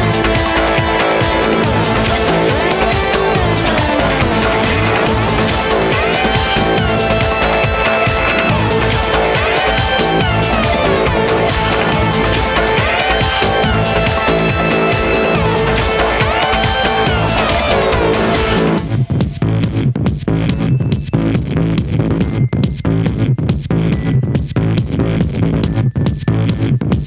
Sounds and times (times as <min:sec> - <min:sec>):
Music: 0:00.0 - 0:27.0.